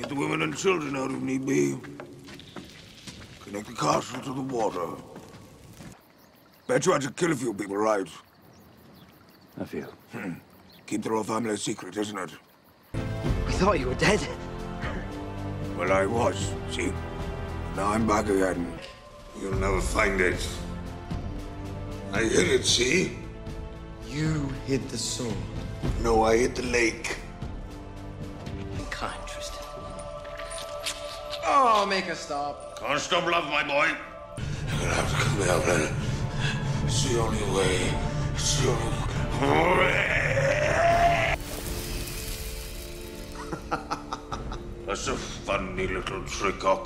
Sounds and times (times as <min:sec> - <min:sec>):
Male speech, man speaking: 0:00.0 - 0:02.0, 0:03.4 - 0:05.2, 0:06.7 - 0:08.3, 0:09.6 - 0:12.4, 0:13.4 - 0:14.4, 0:15.7 - 0:17.0, 0:17.7 - 0:20.7, 0:22.1 - 0:23.2, 0:24.0 - 0:27.3, 0:28.8 - 0:29.8, 0:32.8 - 0:34.1, 0:34.7 - 0:36.0, 0:36.9 - 0:40.1, 0:44.9 - 0:46.8
Music: 0:00.0 - 0:05.0, 0:12.9 - 0:46.8
Conversation: 0:00.0 - 0:46.8.